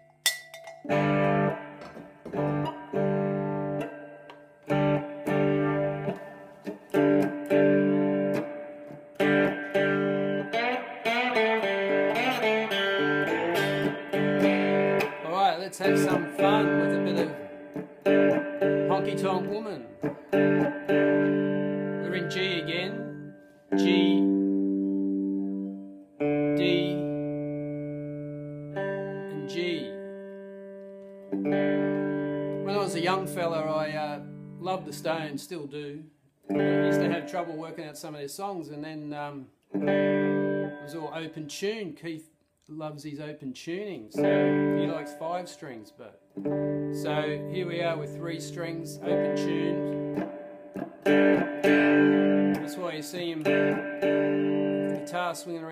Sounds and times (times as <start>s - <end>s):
Music: 0.0s - 35.5s, 36.4s - 37.7s, 39.7s - 41.3s, 44.1s - 45.6s, 46.3s - 55.7s
Distortion: 0.0s - 55.7s
Speech: 15.2s - 17.4s, 18.9s - 20.0s, 22.0s - 23.1s, 23.8s - 24.3s, 26.6s - 27.1s, 29.3s - 30.0s, 32.6s - 36.1s, 36.8s - 39.5s, 40.9s - 46.2s, 47.0s - 49.9s, 52.6s - 53.5s, 55.0s - 55.7s.